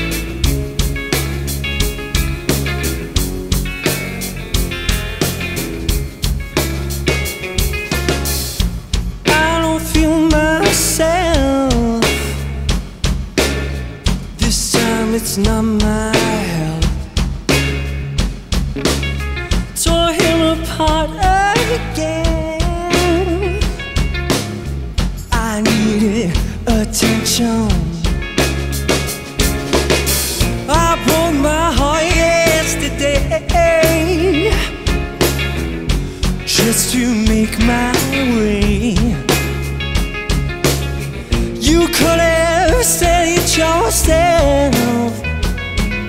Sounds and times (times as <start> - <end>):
Music: 0.0 - 46.0.